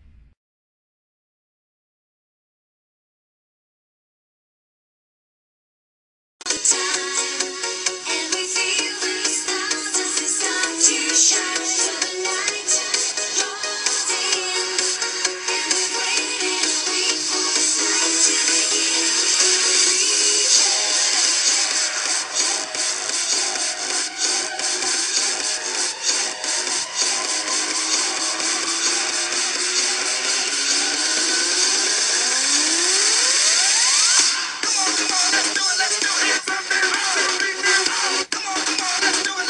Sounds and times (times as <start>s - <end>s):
Music: 6.4s - 39.4s.